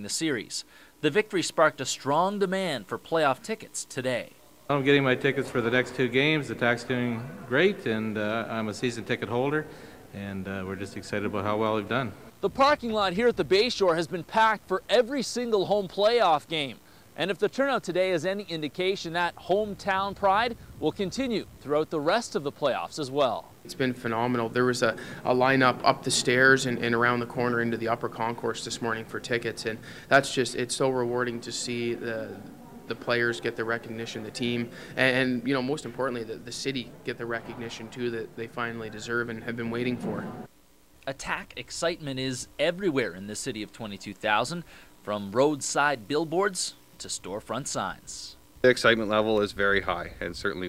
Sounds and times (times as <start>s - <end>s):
Speech: 0.0s - 50.6s.